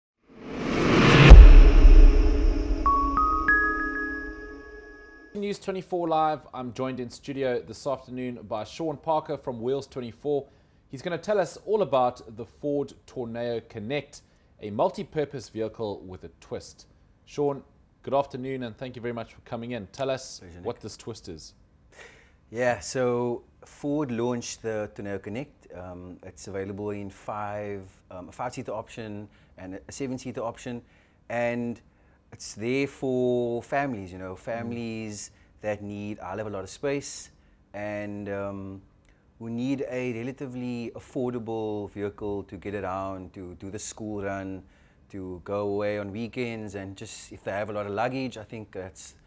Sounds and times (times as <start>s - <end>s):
Ambient music: 0.6s - 5.4s.